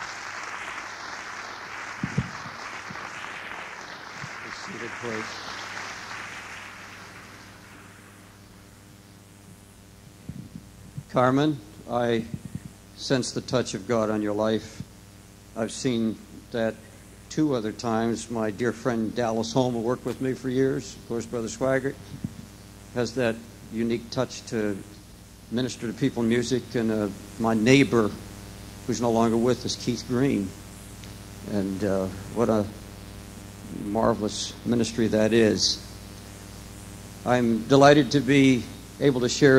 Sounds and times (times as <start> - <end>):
Speech: 4.5 - 5.3, 11.1 - 12.4, 13.0 - 14.8, 15.6 - 22.0, 23.0 - 28.2, 28.9 - 30.6, 31.4 - 32.8, 33.7 - 35.9, 37.2 - 39.5.